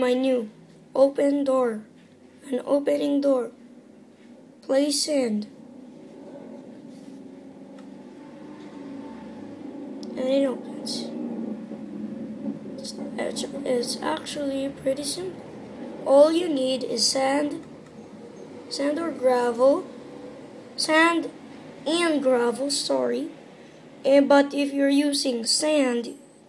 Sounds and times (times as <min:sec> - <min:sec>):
Speech: 0:00.0 - 0:03.6, 0:04.6 - 0:05.5, 0:10.1 - 0:11.2, 0:12.8 - 0:15.4, 0:16.0 - 0:17.6, 0:18.7 - 0:19.9, 0:20.8 - 0:23.4, 0:24.0 - 0:26.2.